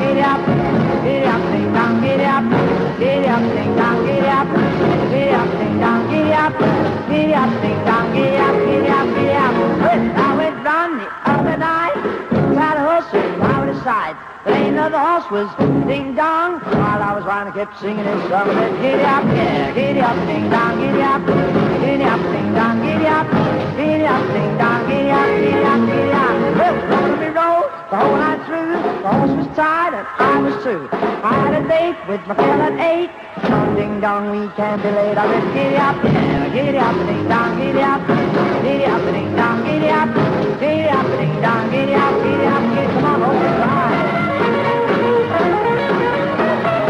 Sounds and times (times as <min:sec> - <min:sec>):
Music: 0:00.0 - 0:46.9.